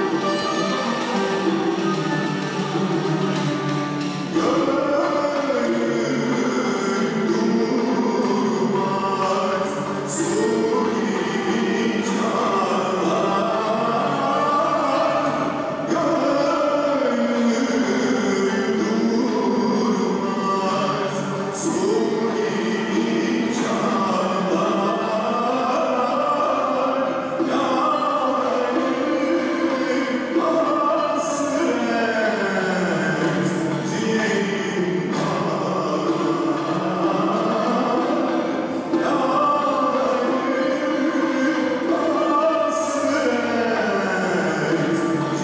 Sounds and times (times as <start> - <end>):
Classical music: 0.0 - 45.4.